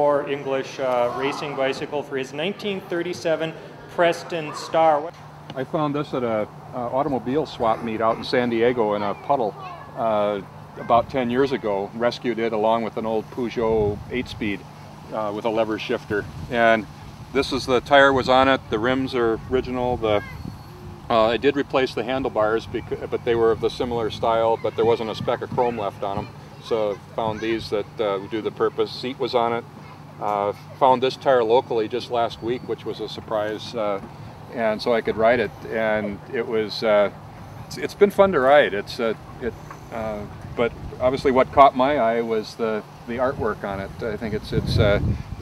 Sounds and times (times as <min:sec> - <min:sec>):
Speech: 0:00.0 - 0:20.3, 0:21.1 - 0:29.6, 0:30.2 - 0:37.1, 0:37.7 - 0:45.0.